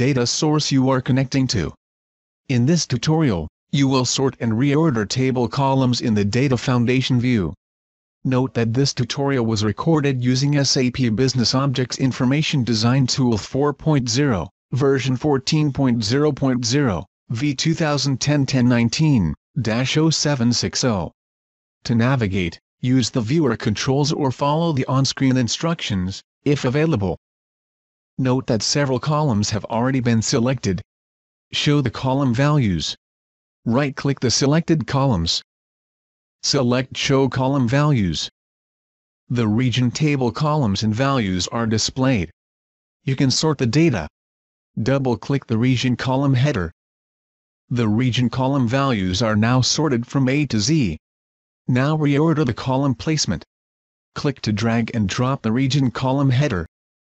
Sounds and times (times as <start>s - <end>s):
Speech synthesizer: 0.0s - 1.8s, 2.5s - 7.6s, 8.3s - 21.2s, 21.9s - 27.2s, 28.2s - 30.8s, 31.6s - 33.0s, 33.7s - 35.4s, 36.4s - 38.3s, 39.3s - 42.3s, 43.1s - 44.1s, 44.8s - 46.8s, 47.7s - 51.0s, 51.7s - 53.5s, 54.2s - 56.7s.